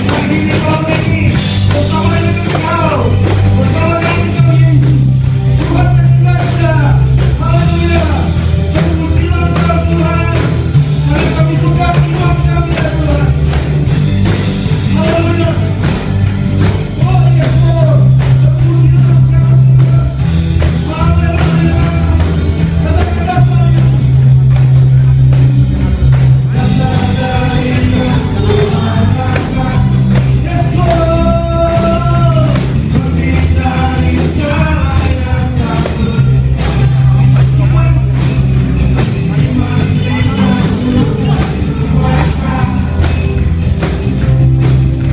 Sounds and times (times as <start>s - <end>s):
Tambourine: 0.0s - 45.1s.